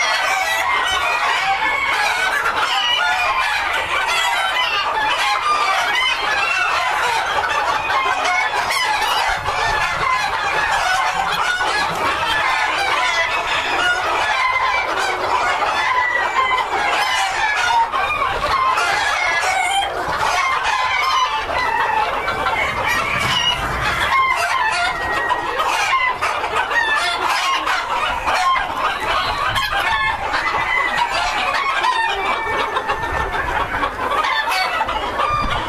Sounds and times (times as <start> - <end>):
Chicken, rooster: 0.0 - 35.6.